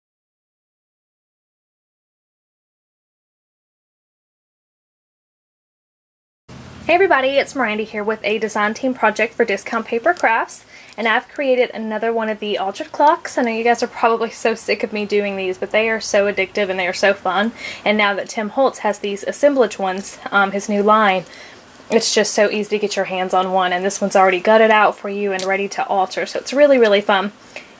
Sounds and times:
Speech: 6.9 - 21.3, 21.9 - 27.4.

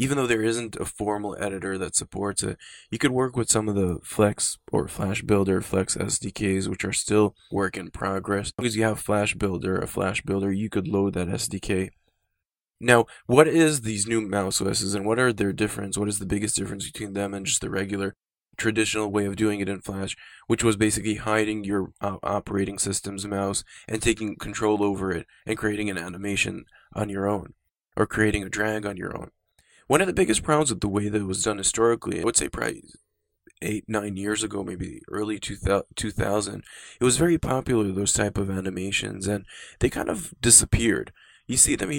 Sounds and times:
Speech: 0.0 - 11.9, 12.8 - 29.3, 29.9 - 33.0, 33.6 - 41.9.

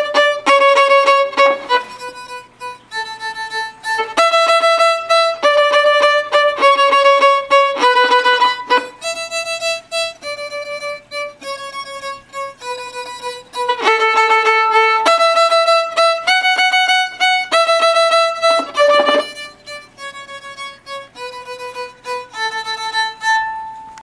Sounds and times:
Violin, fiddle: 0.0 - 24.0.

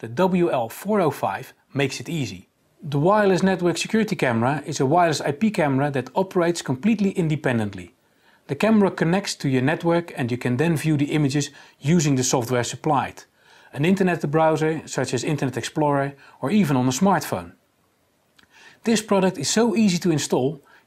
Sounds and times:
Speech: 0.0 - 17.6, 18.8 - 20.7.

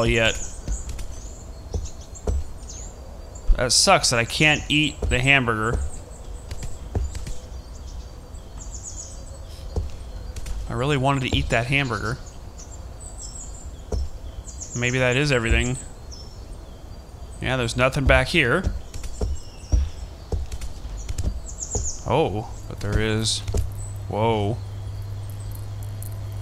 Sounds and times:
Speech: 0.0 - 0.5, 3.6 - 5.9, 10.7 - 12.2, 14.8 - 15.9, 17.4 - 18.8, 22.0 - 23.5, 24.1 - 24.6
Insect: 0.0 - 26.4
Outside, rural or natural: 0.0 - 26.4.

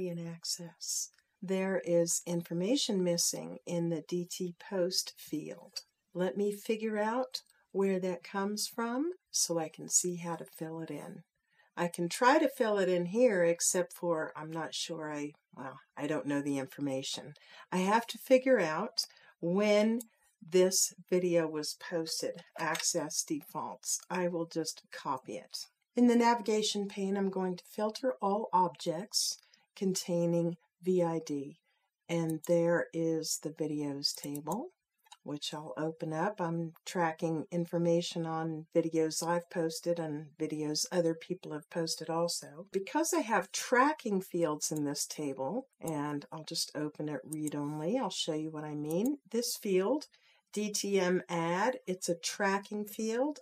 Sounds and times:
Speech: 0.0 - 11.2, 11.8 - 53.4.

